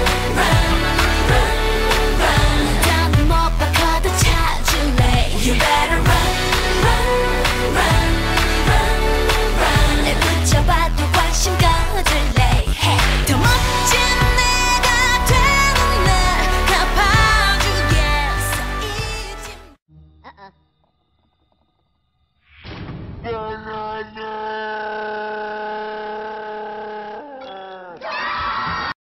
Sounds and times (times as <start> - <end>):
Speech: 23.2 - 28.0.